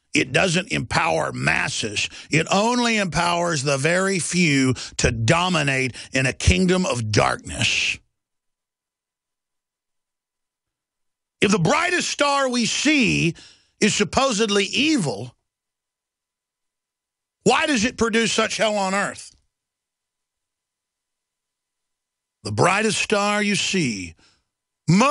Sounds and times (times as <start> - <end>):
Speech: 0.1 - 8.1, 11.4 - 15.4, 17.4 - 19.4, 22.4 - 24.2, 24.9 - 25.1.